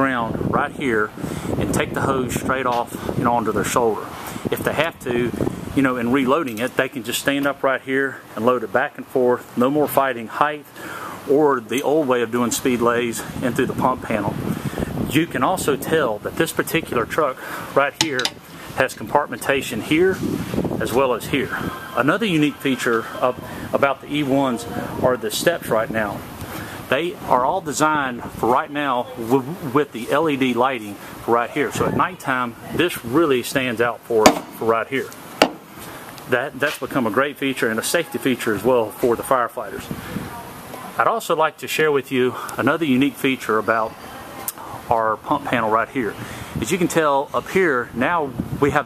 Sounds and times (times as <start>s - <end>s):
Speech: 0.0s - 10.7s, 11.3s - 14.4s, 15.0s - 26.2s, 26.9s - 35.2s, 36.3s - 48.8s.